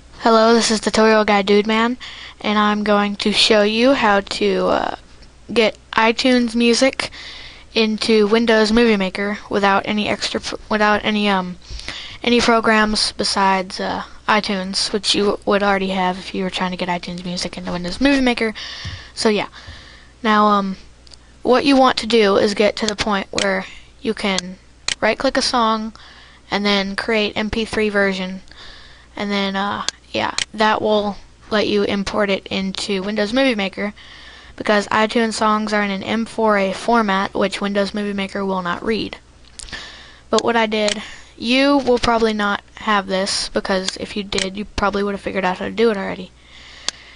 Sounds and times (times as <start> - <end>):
Speech: 0.2 - 11.6, 12.2 - 18.6, 19.2 - 19.6, 20.2 - 20.8, 21.4 - 28.5, 29.2 - 34.0, 34.6 - 39.2, 40.3 - 46.3.